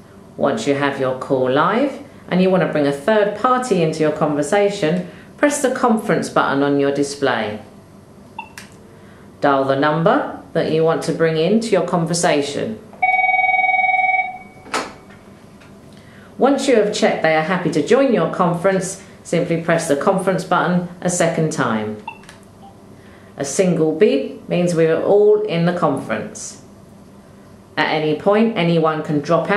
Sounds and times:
Speech: 0.4s - 7.7s, 9.4s - 12.8s, 16.4s - 22.0s, 23.4s - 26.7s, 27.8s - 29.5s
Telephone bell ringing: 13.0s - 14.7s.

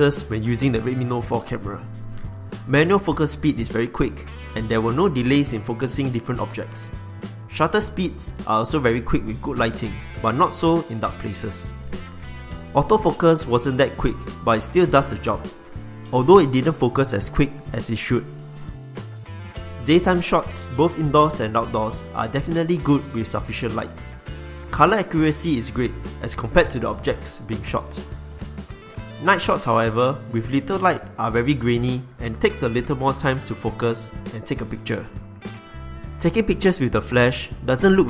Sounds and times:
Speech: 0.0s - 1.9s, 2.7s - 11.8s, 12.8s - 15.5s, 16.1s - 18.3s, 19.8s - 28.1s, 29.2s - 35.2s, 36.2s - 38.0s
Music: 0.0s - 38.0s.

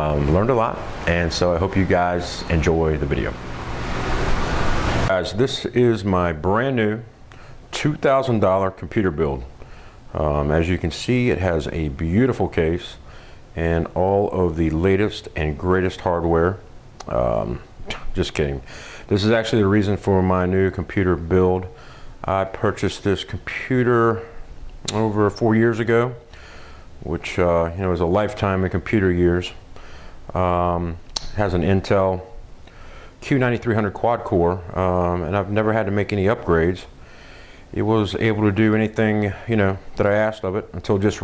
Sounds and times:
Speech: 0.0s - 3.4s, 5.1s - 13.0s, 13.6s - 26.3s, 27.0s - 29.6s, 30.3s - 32.4s, 33.2s - 36.9s, 37.7s - 41.2s.

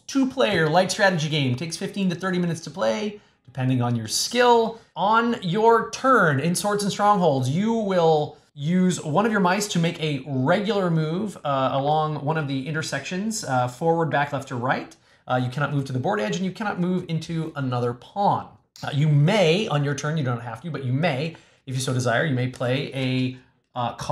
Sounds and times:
Speech: 0.0s - 24.1s.

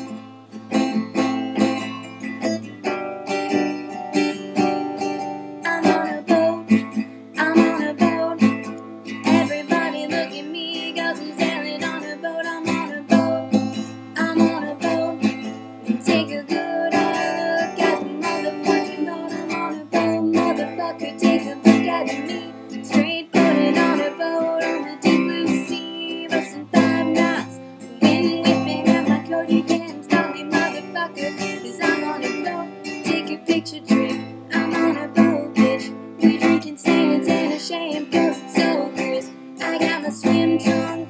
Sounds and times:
Music: 0.0s - 41.0s.

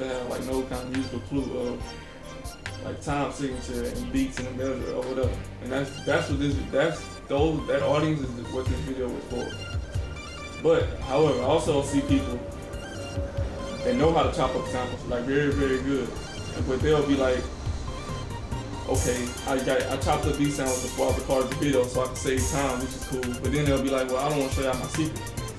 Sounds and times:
Speech: 0.0s - 1.8s, 2.8s - 9.5s, 10.6s - 12.4s, 13.8s - 17.5s, 18.9s - 25.2s
Music: 0.0s - 25.5s.

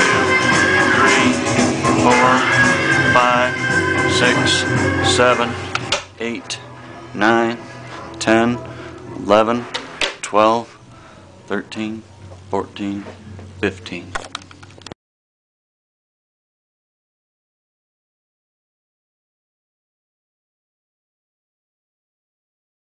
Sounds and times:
Speech: 3.2s - 3.5s, 4.2s - 5.6s, 6.2s - 6.6s, 7.2s - 7.6s, 8.2s - 8.6s, 9.2s - 10.7s, 11.5s - 14.2s.

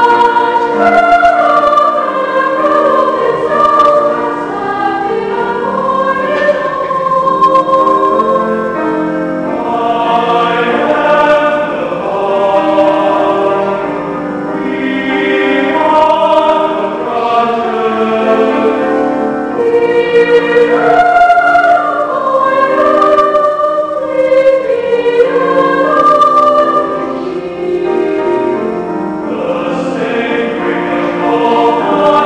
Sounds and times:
Choir: 0.0s - 32.2s.

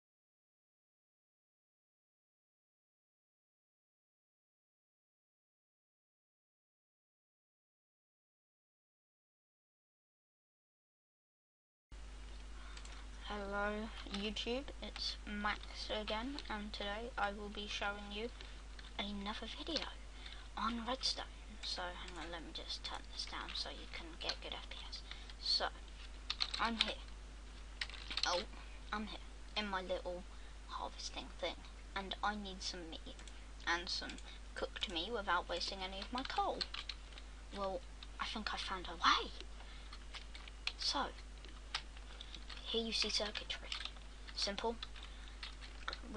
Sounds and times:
Speech: 13.2s - 20.0s, 20.6s - 25.8s, 26.6s - 27.1s, 28.2s - 36.7s, 37.6s - 39.5s, 40.8s - 41.2s, 42.6s - 44.9s, 45.9s - 46.1s.

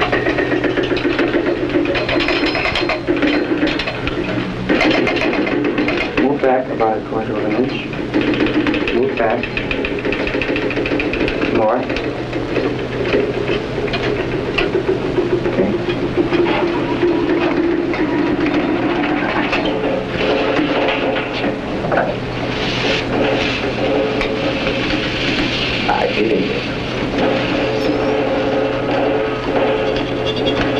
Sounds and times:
Speech: 25.9s - 26.7s.

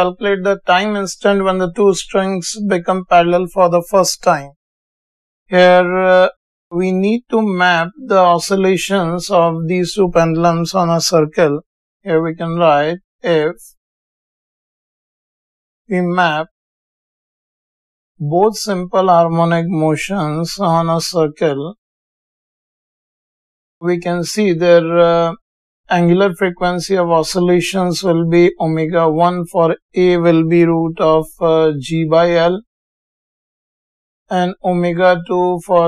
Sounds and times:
Speech: 0.0s - 4.6s, 5.5s - 13.8s, 15.9s - 16.5s, 18.2s - 21.8s, 23.8s - 32.7s, 34.3s - 35.8s.

